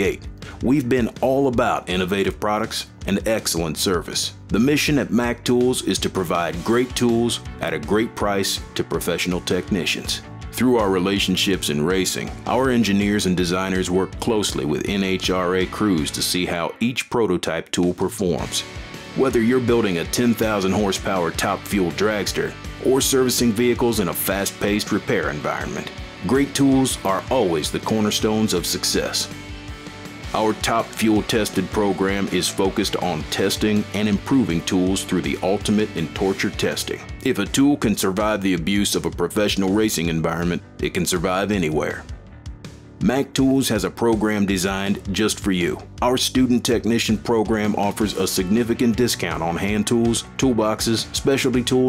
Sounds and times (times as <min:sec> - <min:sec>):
Speech: 0:00.0 - 0:29.4, 0:30.3 - 0:42.1, 0:43.0 - 0:51.8
Music: 0:00.0 - 0:51.8.